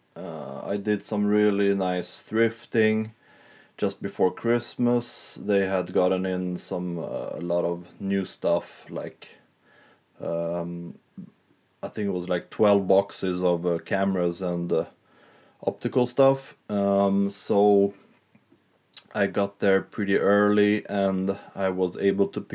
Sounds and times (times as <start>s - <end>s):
Speech: 0.2s - 3.2s, 3.8s - 9.4s, 10.2s - 15.0s, 15.6s - 18.0s, 19.0s - 22.5s.